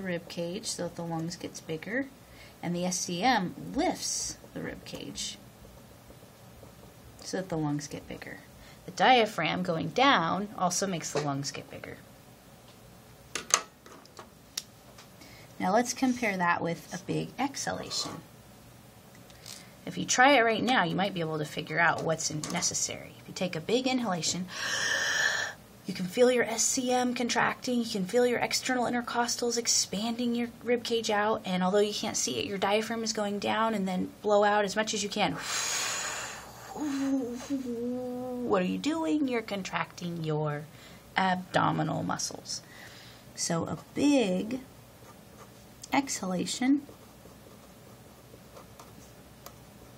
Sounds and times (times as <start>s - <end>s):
Speech: 0.0s - 5.4s, 7.2s - 12.0s, 15.6s - 18.2s, 19.8s - 24.5s, 25.9s - 35.4s, 37.0s - 42.6s, 43.4s - 44.7s, 45.9s - 46.9s.